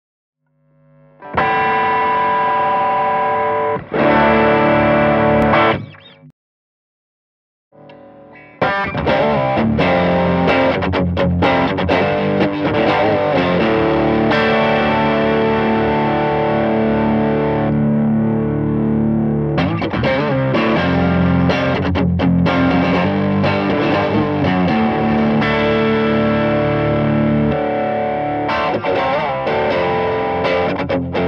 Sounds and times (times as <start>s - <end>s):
Distortion: 0.4s - 6.3s, 7.7s - 31.2s
Bass guitar: 0.8s - 6.3s, 7.8s - 31.2s
Electric guitar: 0.8s - 6.3s, 7.8s - 31.2s.